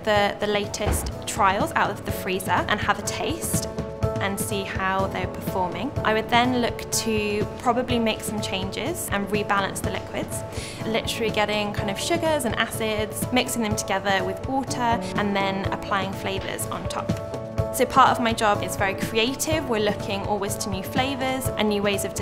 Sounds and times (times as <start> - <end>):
Speech: 0.0 - 17.2, 17.8 - 22.2
Music: 0.0 - 22.2.